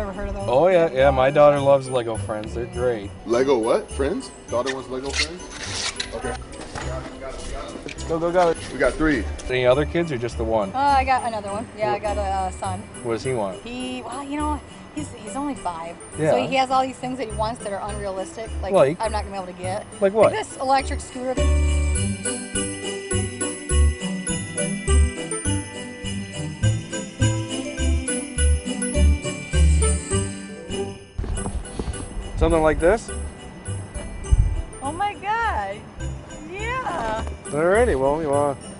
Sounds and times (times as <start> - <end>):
Jingle bell: 0.0 - 38.7.